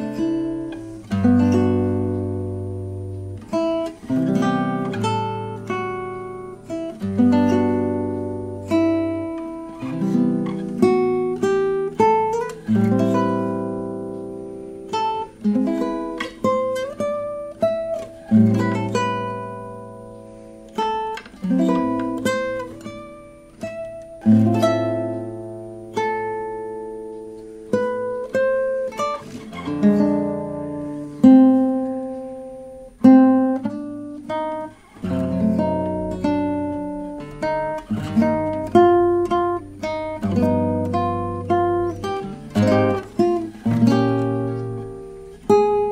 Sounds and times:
Acoustic guitar: 0.0 - 45.9
Strum: 0.0 - 45.9.

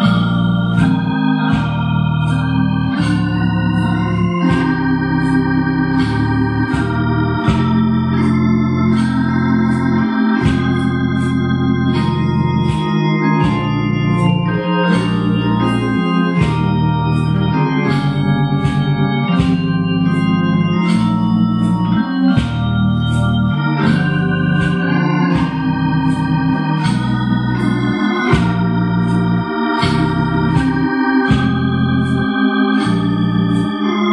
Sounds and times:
Electronic organ: 0.0 - 34.1.

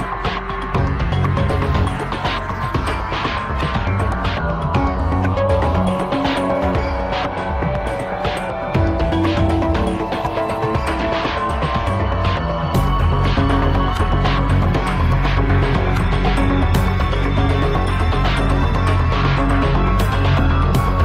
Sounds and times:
Soundtrack music: 0.0 - 21.0.

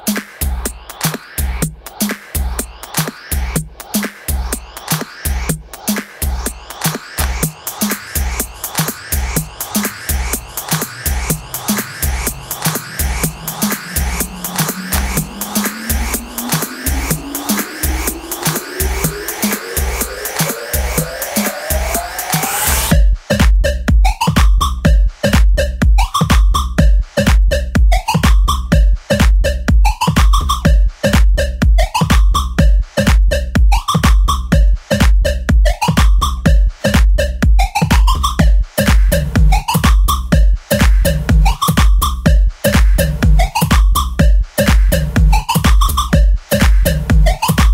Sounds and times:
Music: 0.0 - 47.7.

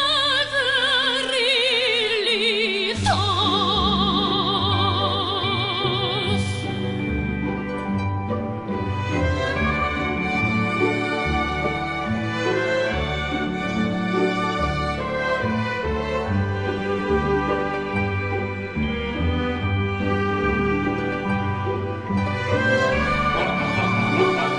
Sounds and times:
Opera: 0.0 - 24.5.

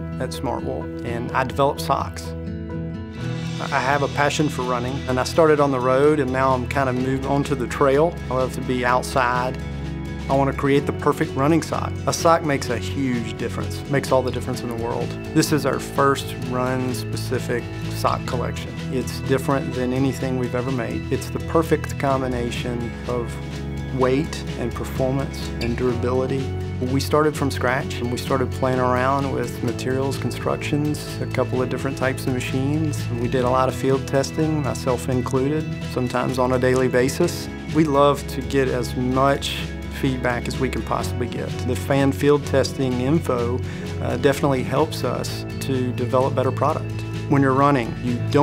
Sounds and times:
Music: 0.0 - 48.4
Speech: 0.2 - 2.3, 3.6 - 9.6, 10.3 - 48.4.

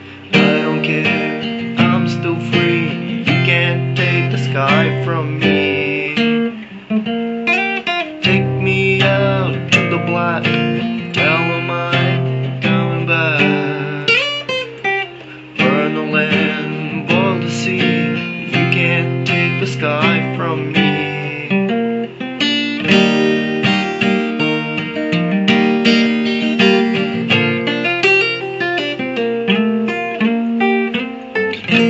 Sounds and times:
Guitar: 0.0 - 31.9.

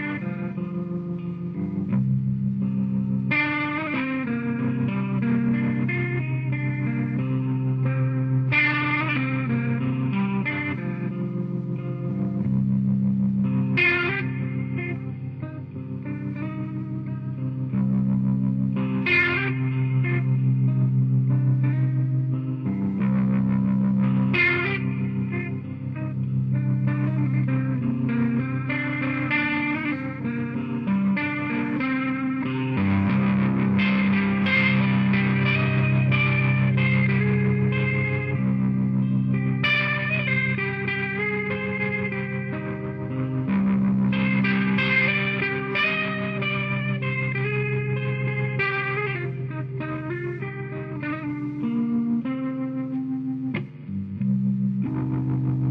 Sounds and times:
Music: 0.0 - 55.7.

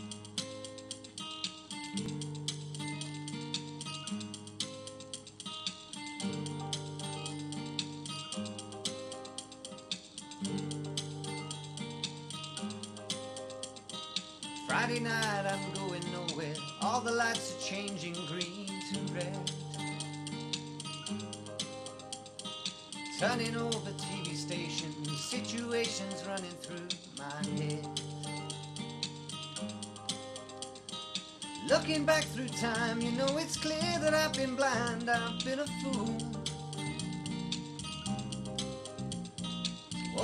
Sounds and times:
Music: 0.0 - 40.2
Male singing: 14.7 - 19.5, 23.2 - 27.9, 31.7 - 36.4.

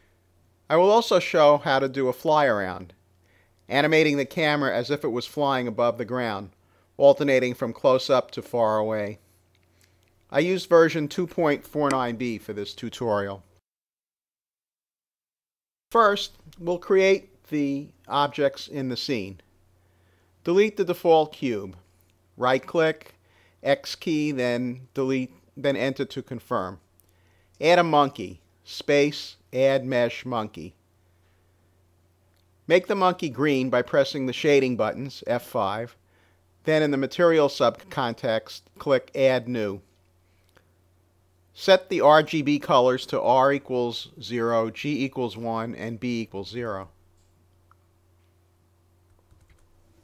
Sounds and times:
Speech: 0.7 - 3.0, 3.7 - 9.2, 10.3 - 13.5, 15.9 - 19.5, 20.4 - 21.8, 22.4 - 26.8, 27.6 - 30.8, 32.7 - 36.0, 36.6 - 39.9, 41.6 - 47.0.

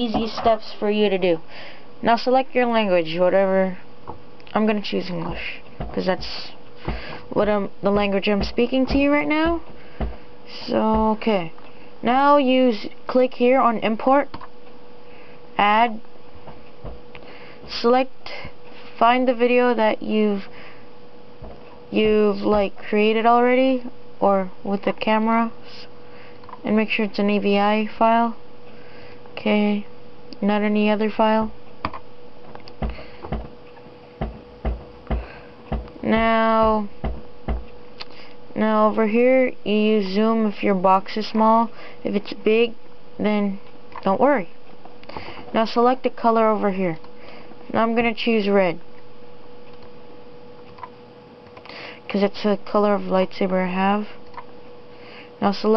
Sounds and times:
Speech: 0.0 - 1.4, 2.0 - 3.8, 4.5 - 6.6, 7.3 - 9.6, 10.5 - 14.3, 15.6 - 16.0, 17.7 - 20.5, 21.9 - 25.9, 26.6 - 28.4, 29.4 - 31.6, 36.0 - 36.9, 38.6 - 44.5, 45.5 - 47.0, 47.7 - 48.8, 52.1 - 54.2, 55.4 - 55.7
Inside, small room: 0.0 - 55.7.

